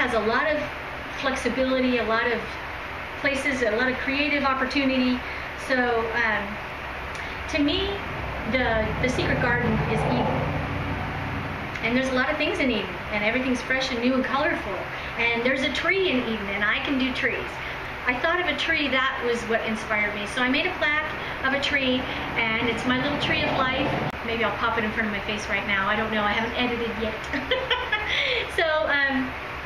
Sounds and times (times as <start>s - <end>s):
Speech: 0.0s - 2.6s, 3.2s - 6.6s, 7.5s - 10.5s, 11.8s - 29.3s.